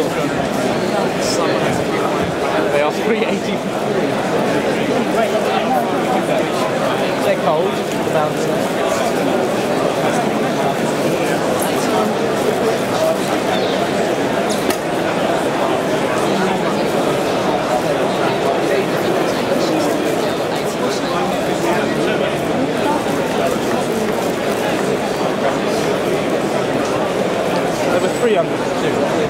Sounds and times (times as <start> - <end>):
Speech: 0.0 - 29.2.